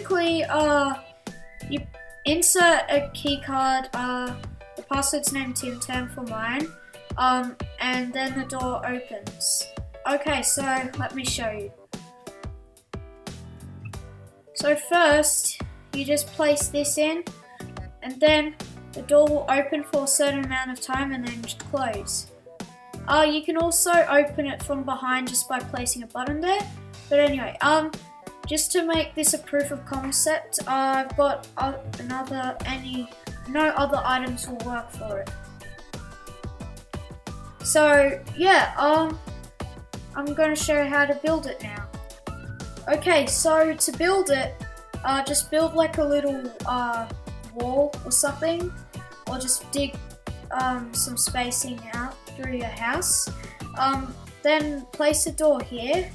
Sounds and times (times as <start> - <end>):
Speech: 0.0 - 1.0, 1.7 - 11.7, 14.6 - 17.3, 18.0 - 22.3, 23.1 - 27.9, 28.5 - 35.4, 37.6 - 39.2, 40.2 - 41.9, 42.9 - 48.7, 49.3 - 56.1
Music: 0.0 - 56.1.